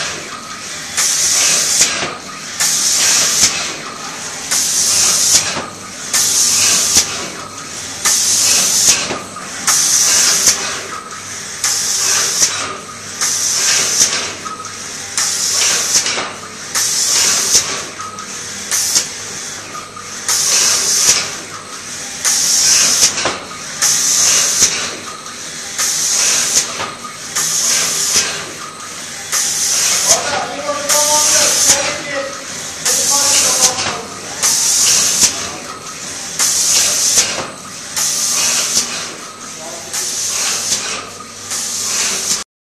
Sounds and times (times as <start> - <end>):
Inside, large room or hall: 29.3 - 41.1
Speech: 30.0 - 34.6, 39.6 - 40.1.